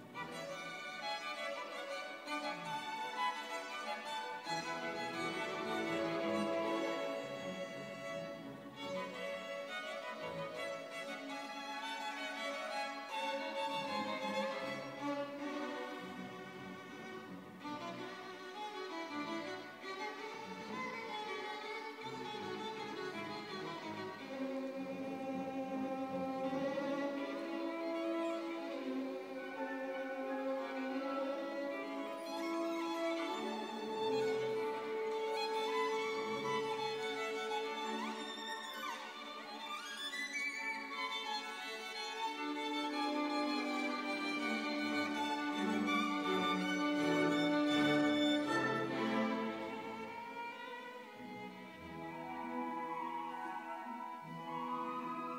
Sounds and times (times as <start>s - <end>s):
Orchestra: 0.0s - 55.3s.